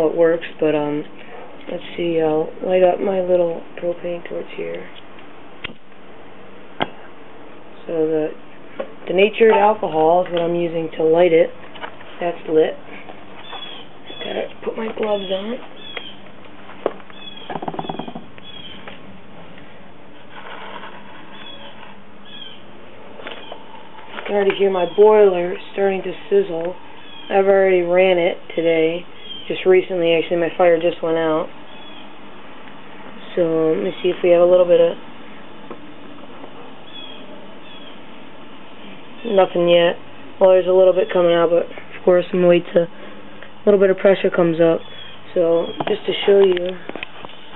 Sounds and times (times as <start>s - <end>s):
Speech: 0.0s - 1.1s, 1.7s - 5.0s, 7.8s - 8.4s, 9.1s - 11.6s, 12.2s - 12.8s, 14.2s - 15.6s, 24.2s - 31.6s, 33.2s - 35.0s, 39.2s - 43.0s, 43.6s - 46.9s.